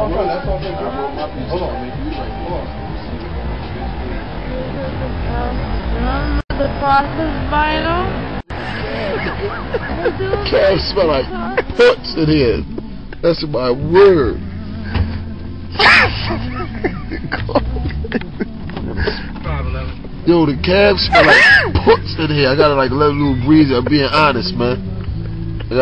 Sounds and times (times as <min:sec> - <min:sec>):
Music: 0:00.0 - 0:25.8
Outside, urban or manmade: 0:00.0 - 0:25.8.